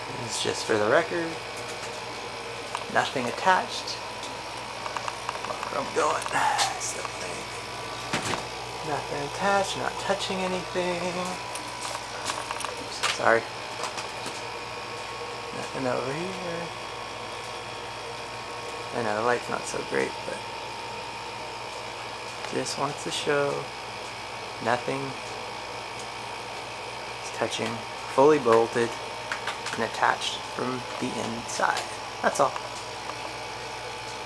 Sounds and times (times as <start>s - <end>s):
Air conditioning: 0.0s - 34.2s
Speech: 0.1s - 1.4s, 2.9s - 4.0s, 5.6s - 7.6s, 8.8s - 11.4s, 12.9s - 13.5s, 15.5s - 16.8s, 18.9s - 20.4s, 22.5s - 23.7s, 24.6s - 25.2s, 27.2s - 29.0s, 29.7s - 32.6s.